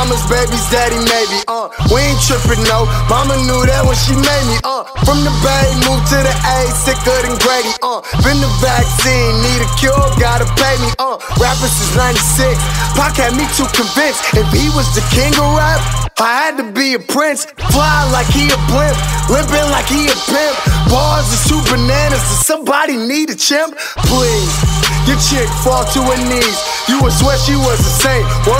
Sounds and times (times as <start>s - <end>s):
Music: 0.0s - 16.2s, 17.6s - 22.4s, 23.8s - 28.5s.